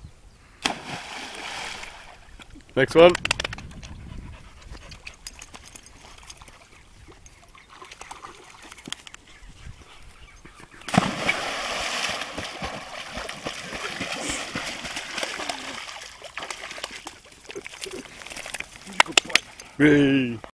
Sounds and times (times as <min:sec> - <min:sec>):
Speech: 0:02.8 - 0:03.2, 0:19.8 - 0:20.4.